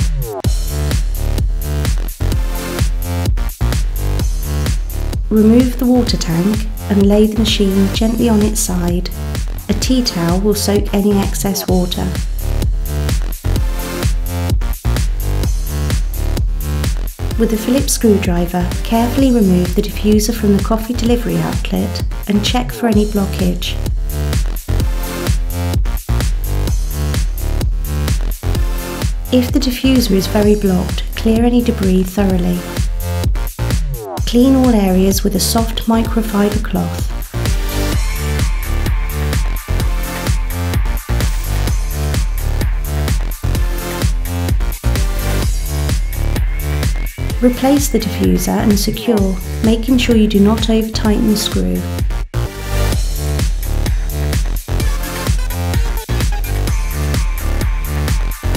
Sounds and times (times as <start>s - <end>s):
Music: 0.0s - 58.5s
Speech: 5.3s - 12.2s, 17.4s - 23.8s, 29.3s - 32.7s, 34.3s - 37.1s, 47.4s - 51.9s.